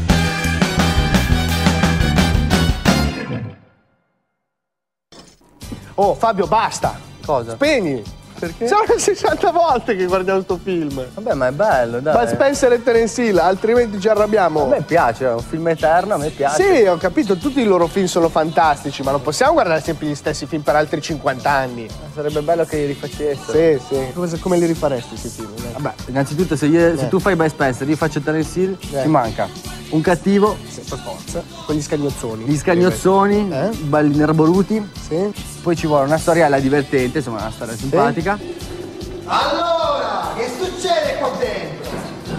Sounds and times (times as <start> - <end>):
Music: 0.0 - 4.6, 5.2 - 42.3
Speech: 6.0 - 38.4, 39.3 - 42.2.